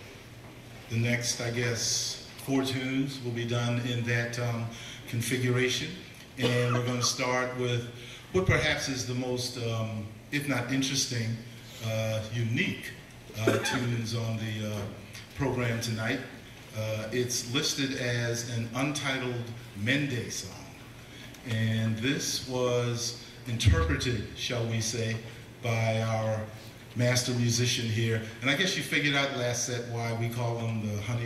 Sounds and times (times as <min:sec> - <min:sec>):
Speech: 0:00.9 - 0:20.8, 0:21.4 - 0:31.2.